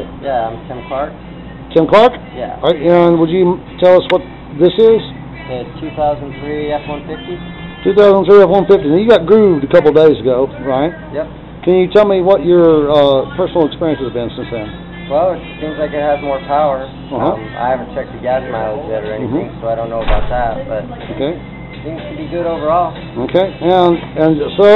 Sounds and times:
Music: 0.7s - 11.2s, 12.6s - 24.7s.

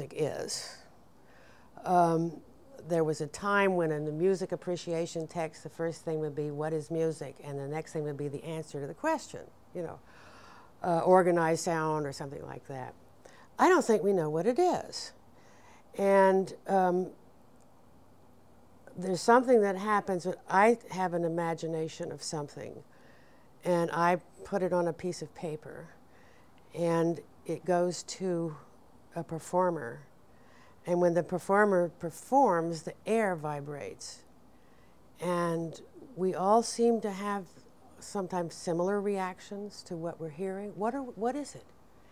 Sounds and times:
Speech: 0.0s - 0.9s, 1.8s - 10.0s, 10.8s - 13.0s, 13.6s - 15.2s, 16.0s - 17.2s, 18.9s - 22.8s, 23.6s - 26.0s, 26.7s - 30.1s, 30.9s - 34.3s, 35.2s - 41.7s.

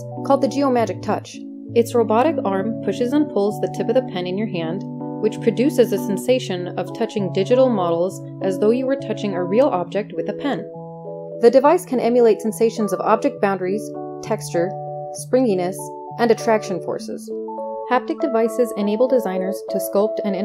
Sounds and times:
Music: 0.0s - 20.4s
Speech: 0.3s - 10.7s, 11.4s - 17.3s, 17.9s - 20.4s.

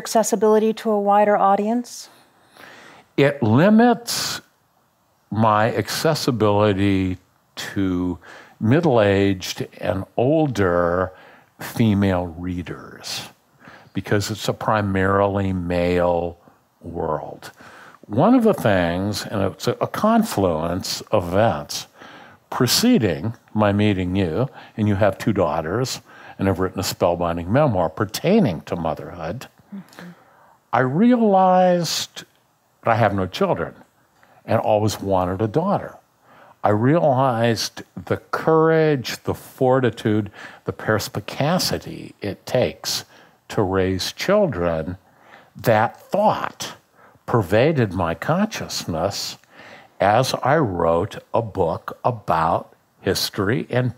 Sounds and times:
Speech: 0.0s - 2.1s, 3.2s - 4.5s, 5.3s - 13.4s, 14.0s - 30.2s, 30.8s - 33.8s, 34.5s - 36.0s, 36.6s - 45.0s, 45.6s - 53.9s.

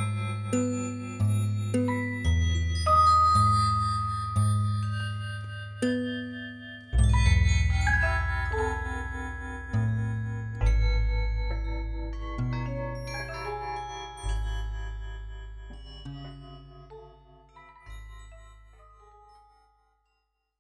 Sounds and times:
Marimba, xylophone: 0.0s - 20.2s
Glockenspiel: 0.0s - 20.6s.

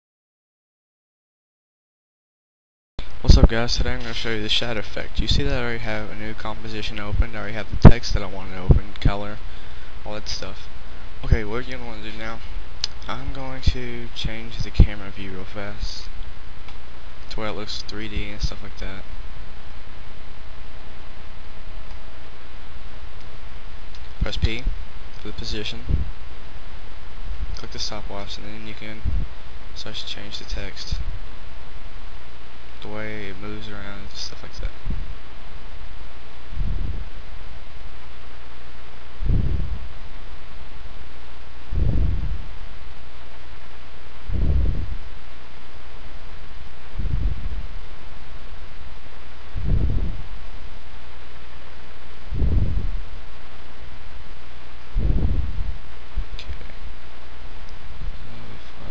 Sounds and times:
Speech: 3.2s - 9.4s, 10.0s - 16.2s, 17.3s - 19.1s, 24.2s - 26.0s, 27.6s - 29.1s, 29.8s - 31.1s, 32.8s - 34.8s, 58.2s - 58.9s.

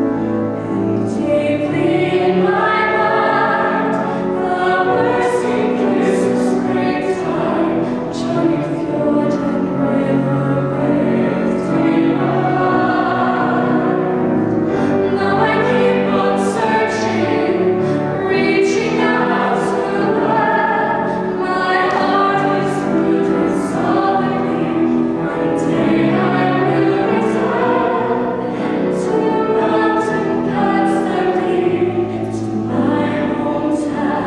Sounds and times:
Choir: 0.0s - 34.2s
Gospel music: 0.0s - 34.2s.

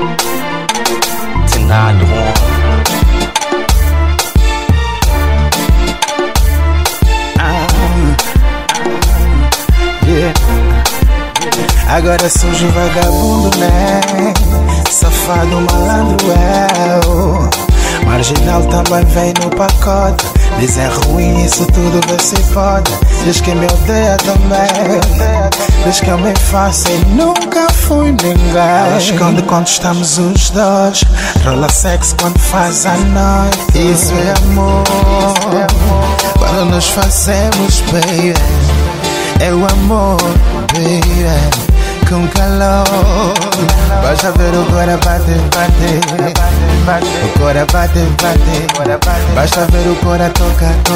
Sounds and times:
Dance music: 0.0s - 50.9s.

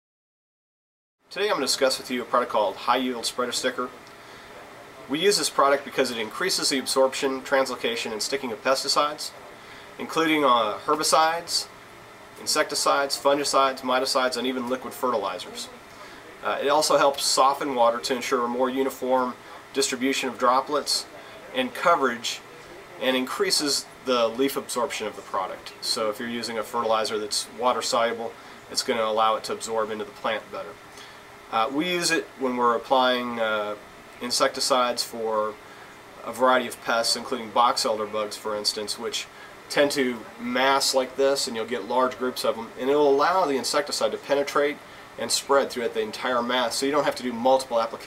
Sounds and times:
Speech: 1.3s - 11.7s, 12.4s - 30.8s, 31.5s - 35.6s, 36.2s - 48.0s.

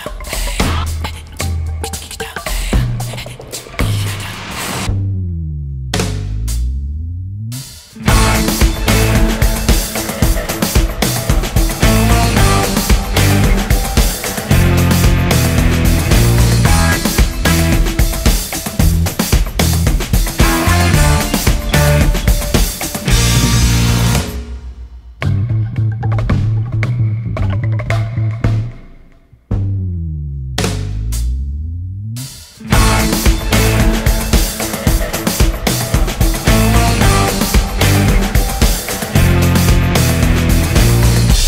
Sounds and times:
Rhythm and blues: 0.0s - 5.0s, 6.0s - 41.4s
Dance music: 8.0s - 24.7s, 32.6s - 41.4s.

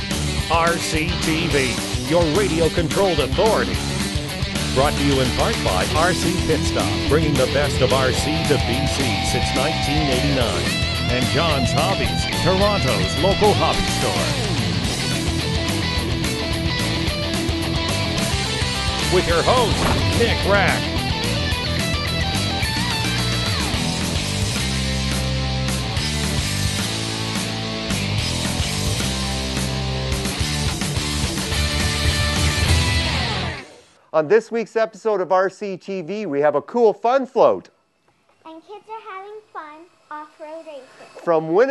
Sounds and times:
Music: 0.0s - 34.1s
Speech: 0.5s - 3.8s, 4.8s - 14.4s, 19.1s - 20.9s, 34.2s - 37.7s, 41.2s - 41.7s.

